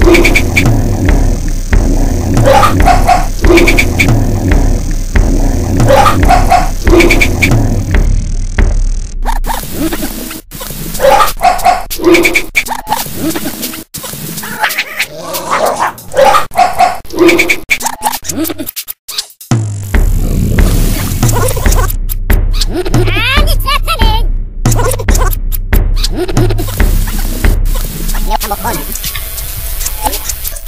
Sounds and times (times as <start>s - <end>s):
Music: 0.0s - 10.6s, 19.4s - 30.6s
Speech: 23.0s - 24.3s, 28.2s - 29.0s.